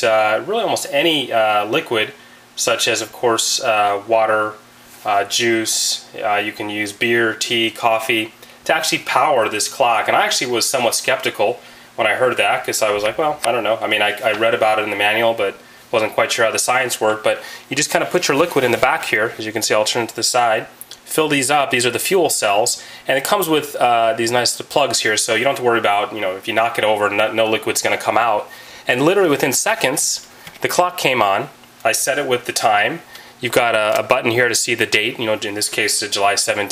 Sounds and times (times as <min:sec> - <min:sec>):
Speech: 0:00.0 - 0:36.7.